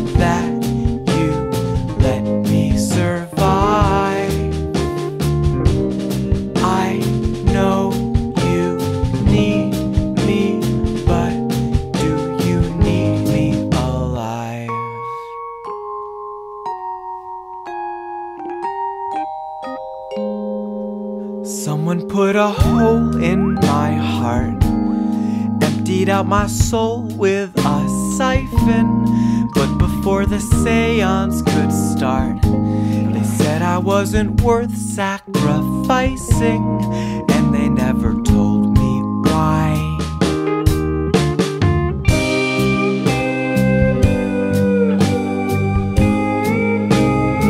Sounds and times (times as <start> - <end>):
Music: 0.0 - 47.4.